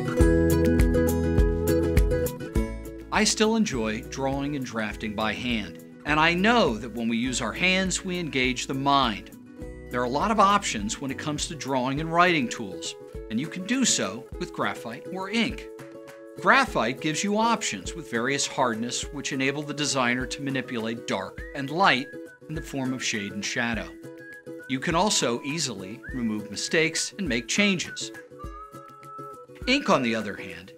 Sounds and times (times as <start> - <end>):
Music: 0.0 - 30.7
Speech: 3.2 - 9.3, 10.0 - 15.7, 16.4 - 24.0, 24.7 - 28.2, 29.6 - 30.7.